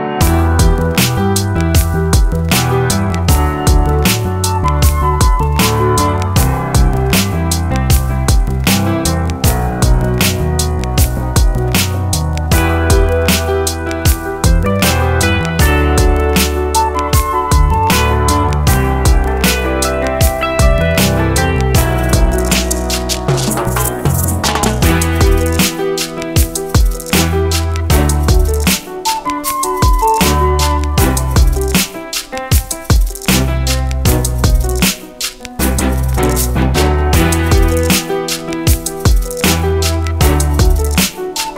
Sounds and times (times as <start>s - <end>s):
Music: 0.0s - 41.5s.